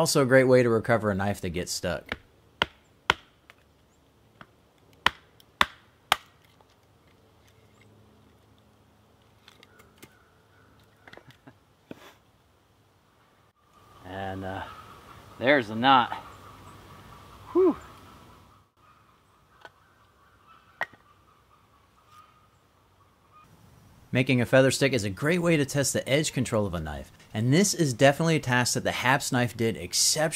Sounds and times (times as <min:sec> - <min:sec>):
Speech: 0:00.0 - 0:02.1, 0:14.0 - 0:14.7, 0:15.4 - 0:16.2, 0:24.1 - 0:30.3
Outside, rural or natural: 0:00.0 - 0:30.3.